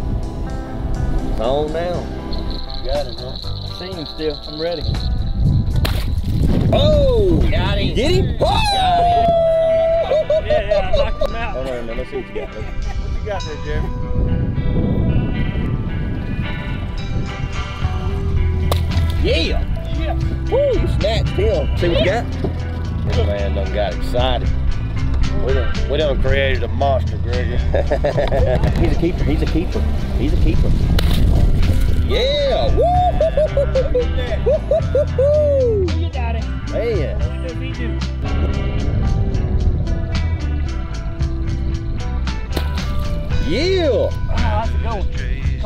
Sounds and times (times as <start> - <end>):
Music: 0.0 - 45.6.